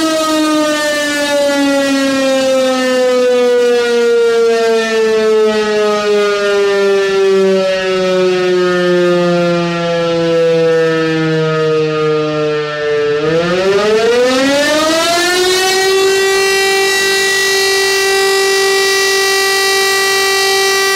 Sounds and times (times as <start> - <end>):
Civil defense siren: 0.0 - 20.9.